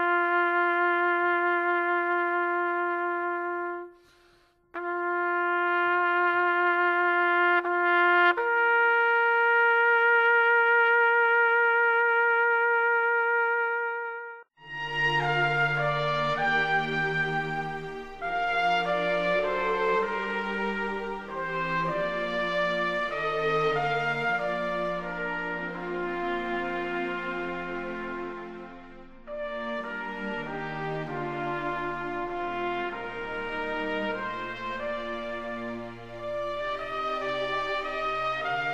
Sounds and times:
Trombone: 0.0s - 38.7s.

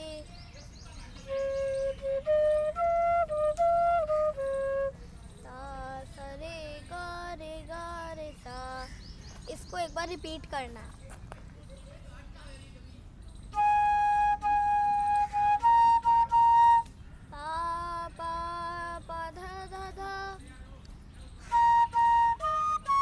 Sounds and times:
Flute: 0.0s - 5.7s, 13.5s - 17.1s, 21.4s - 23.0s
Speech: 9.5s - 13.1s.

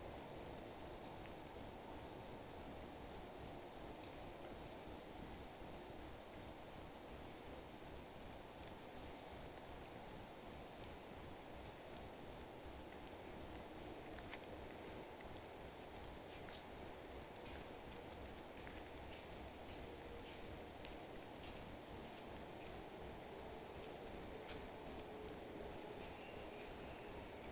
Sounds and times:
Walk, footsteps: 13.6s - 16.7s, 17.4s - 22.8s, 23.7s - 25.1s, 26.0s - 27.3s.

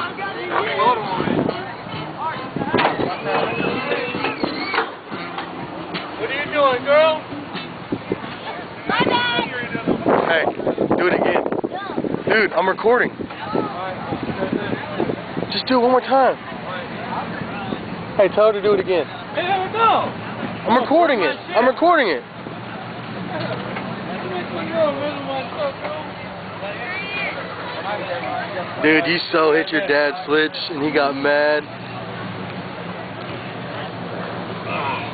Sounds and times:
Vehicle: 0.0s - 35.1s.

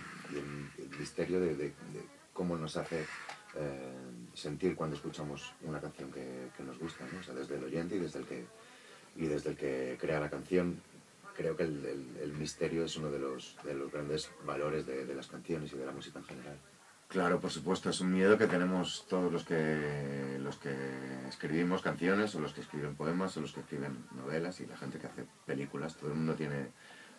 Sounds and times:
Speech: 0.3s - 8.6s, 9.2s - 26.8s.

